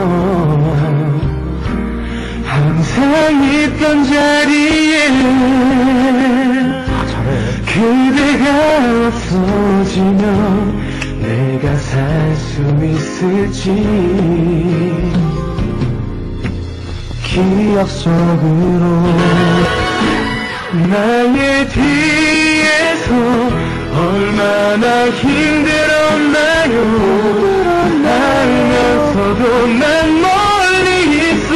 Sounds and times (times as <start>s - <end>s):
Male singing: 0.0s - 1.3s, 2.4s - 15.8s, 17.2s - 19.8s, 20.7s - 31.5s
Music: 0.0s - 31.5s.